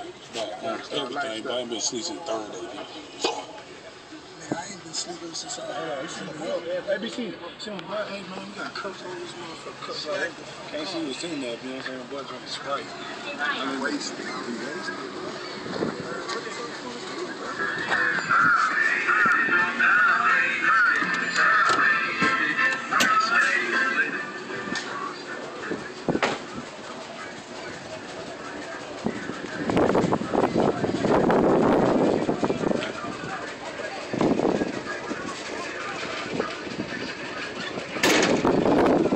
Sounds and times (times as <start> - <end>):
Speech: 0.0 - 39.1.